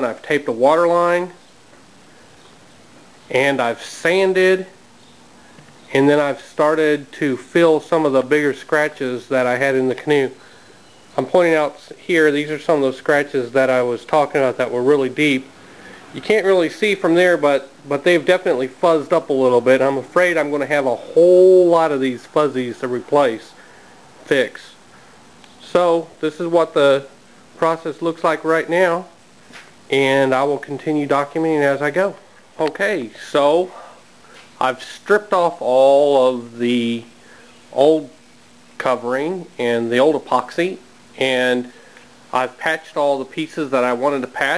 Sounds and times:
Speech: 0.0 - 1.4, 3.3 - 4.8, 5.9 - 10.4, 11.2 - 15.5, 16.2 - 23.6, 24.2 - 24.8, 25.6 - 29.2, 29.9 - 33.9, 34.6 - 37.1, 37.7 - 38.2, 38.8 - 41.7, 42.3 - 44.5.

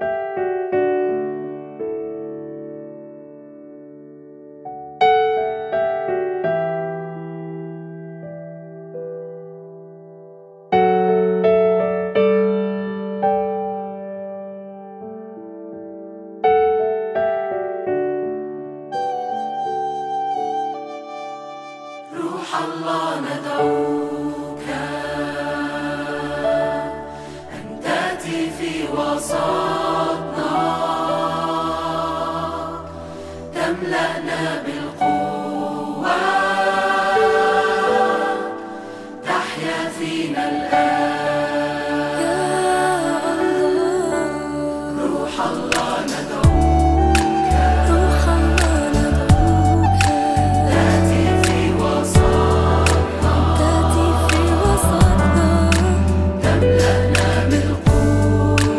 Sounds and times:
Music: 0.0 - 58.7.

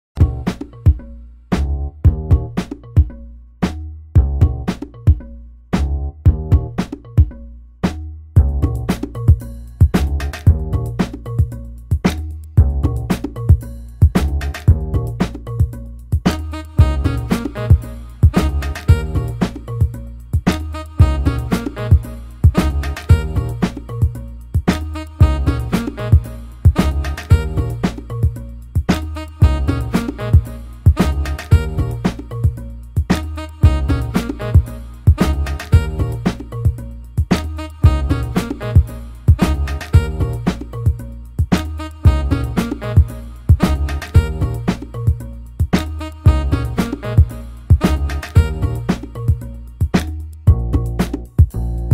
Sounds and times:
Funk: 0.2 - 5.2, 5.8 - 51.9.

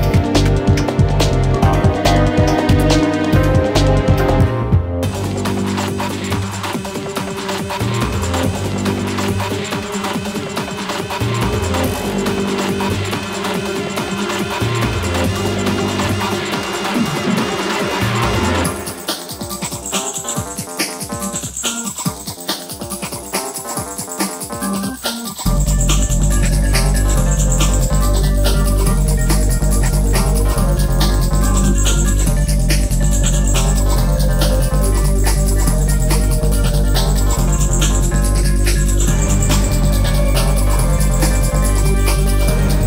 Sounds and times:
Music: 0.0 - 42.8.

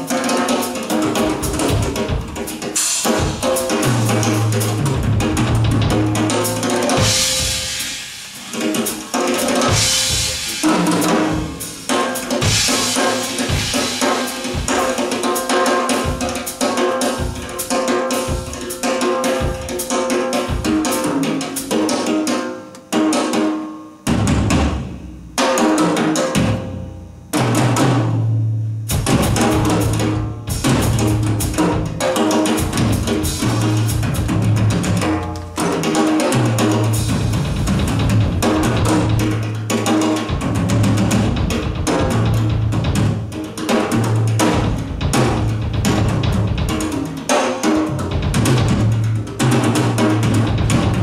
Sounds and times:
Cymbal: 0.0 - 51.0
Drum: 0.0 - 51.0
Drum kit: 0.0 - 51.0.

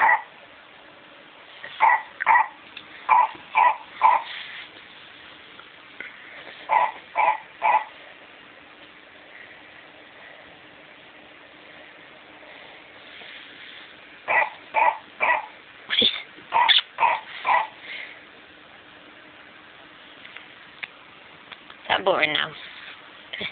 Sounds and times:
Yip: 0.0 - 0.3, 1.8 - 4.3, 6.7 - 8.0, 14.3 - 17.8.

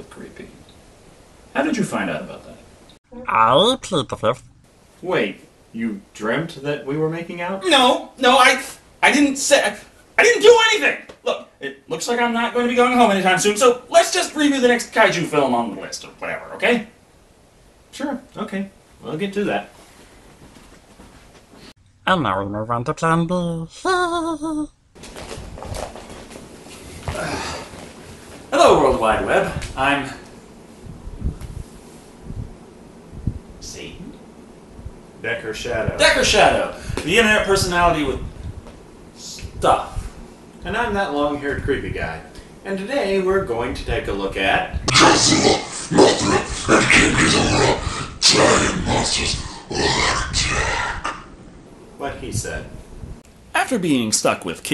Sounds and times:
Inside, small room: 0.0 - 54.7
Speech: 5.0 - 17.0, 18.0 - 19.7, 28.6 - 30.2, 35.2 - 38.2, 40.6 - 50.7, 53.6 - 54.7.

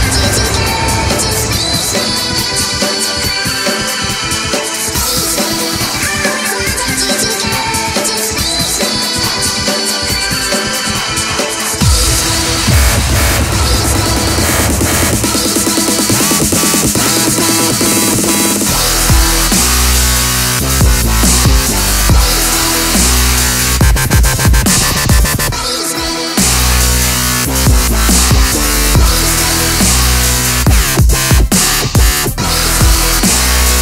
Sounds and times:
Dubstep: 0.0 - 33.8.

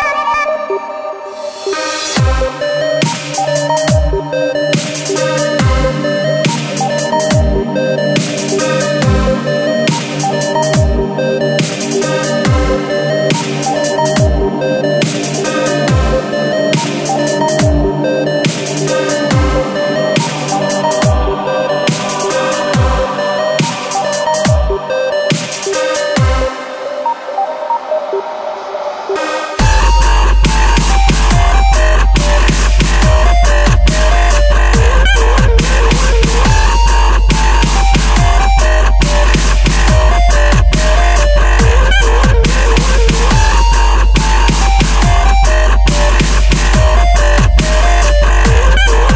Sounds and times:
Drum and bass: 0.0 - 49.1.

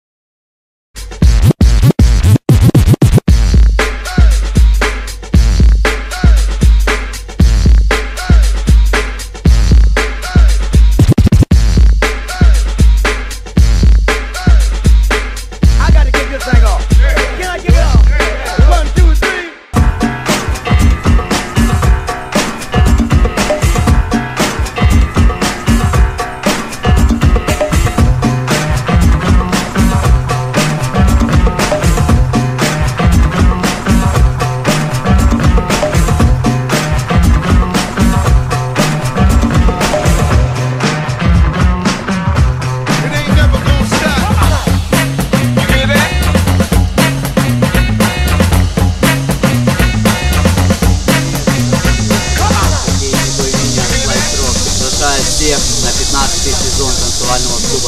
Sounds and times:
Music: 1.0 - 57.8.

